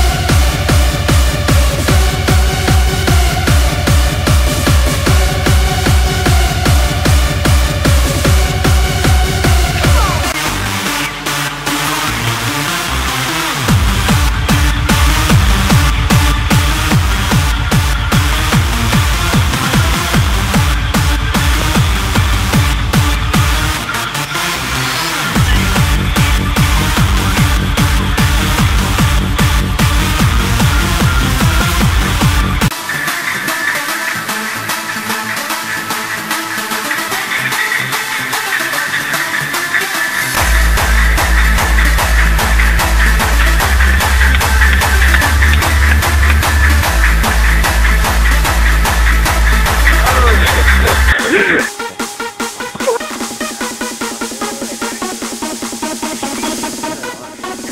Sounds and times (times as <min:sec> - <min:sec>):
Electronic dance music: 0:00.0 - 0:57.7.